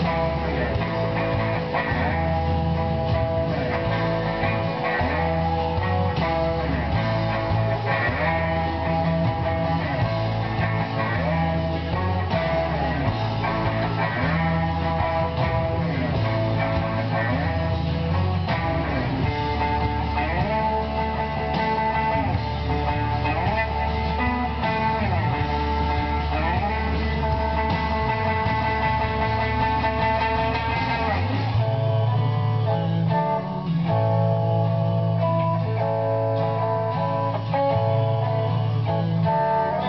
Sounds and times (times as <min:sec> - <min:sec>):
Acoustic guitar: 0:00.0 - 0:39.8
Electric guitar: 0:00.0 - 0:39.8
Strum: 0:00.0 - 0:39.8.